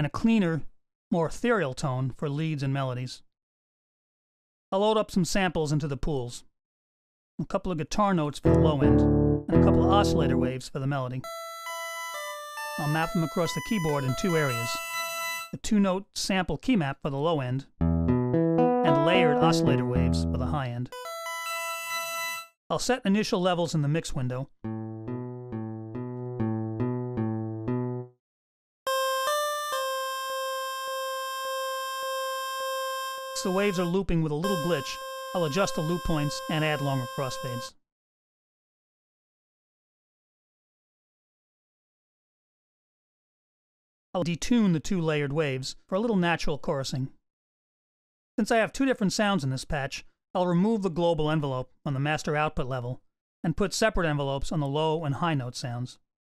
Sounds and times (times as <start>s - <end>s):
Speech: 0.0s - 3.3s, 4.8s - 6.5s, 7.4s - 11.3s, 12.8s - 14.8s, 15.6s - 17.7s, 18.9s - 21.0s, 22.7s - 24.5s, 33.4s - 37.8s, 44.2s - 47.2s, 48.4s - 56.0s
Music: 8.4s - 10.7s, 11.3s - 13.1s, 17.8s - 22.6s, 24.7s - 28.2s.